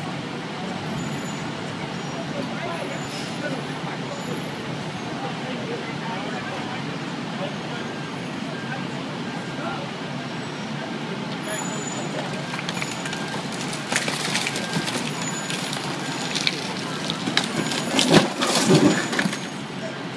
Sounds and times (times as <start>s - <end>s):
Speech: 0.0s - 12.6s, 19.6s - 20.1s.